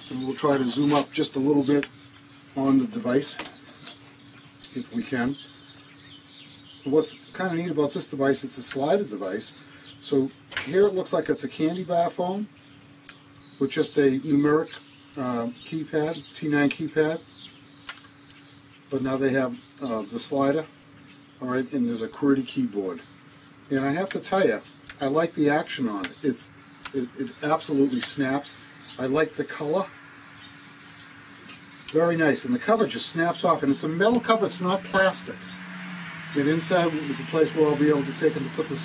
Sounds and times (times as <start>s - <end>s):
Speech: 0.0s - 1.9s, 2.6s - 3.5s, 4.7s - 5.4s, 6.9s - 12.5s, 13.6s - 17.3s, 18.9s - 20.7s, 21.4s - 23.1s, 23.7s - 29.9s, 31.9s - 35.4s, 36.4s - 38.8s
Outside, rural or natural: 0.0s - 38.8s.